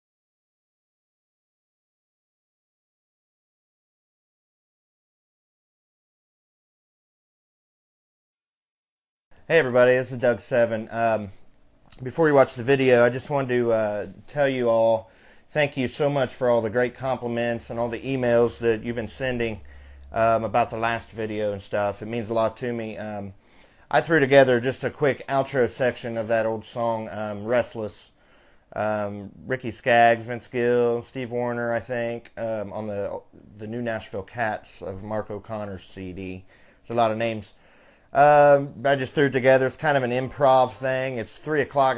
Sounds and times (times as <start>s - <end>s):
Speech: 9.5s - 41.9s.